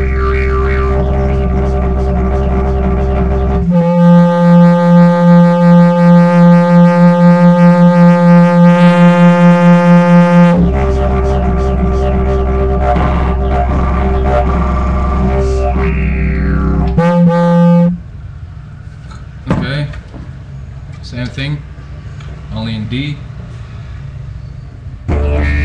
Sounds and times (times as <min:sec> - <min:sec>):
Didgeridoo: 0:00.0 - 0:18.1, 0:25.1 - 0:25.6.